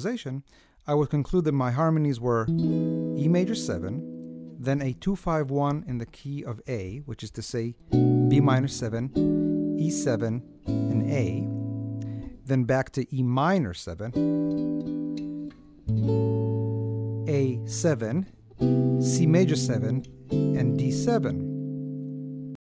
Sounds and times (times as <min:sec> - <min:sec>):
Speech: 0:00.0 - 0:02.5, 0:03.2 - 0:04.0, 0:04.6 - 0:09.2, 0:09.8 - 0:11.5, 0:12.5 - 0:14.2, 0:17.3 - 0:18.3, 0:19.1 - 0:21.5
Acoustic guitar: 0:02.5 - 0:04.7, 0:07.8 - 0:12.5, 0:14.2 - 0:22.6
Strum: 0:07.9 - 0:12.6, 0:14.2 - 0:22.6.